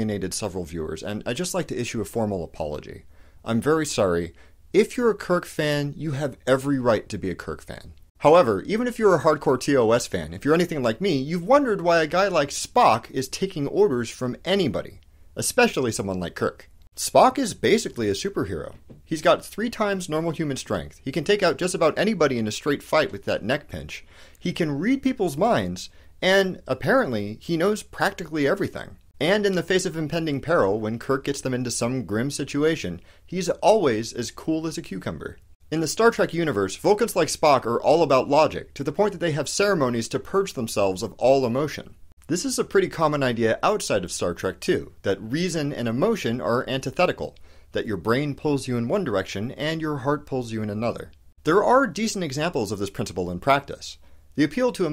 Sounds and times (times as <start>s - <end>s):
Speech: 0.0s - 54.9s.